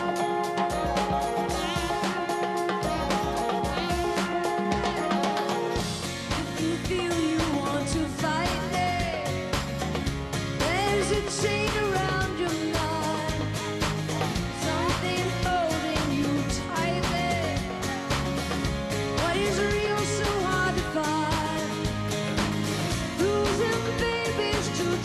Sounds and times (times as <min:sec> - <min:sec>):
Music: 0:00.0 - 0:25.0.